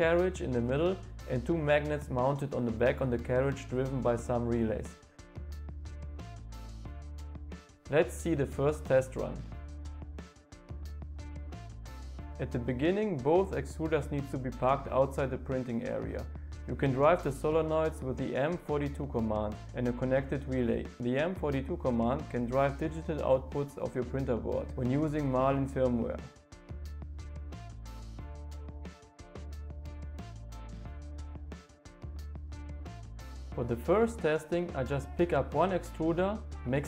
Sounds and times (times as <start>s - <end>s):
Speech: 0.0s - 5.0s, 7.9s - 9.5s, 12.4s - 26.3s, 33.6s - 36.8s
Music: 0.0s - 36.8s.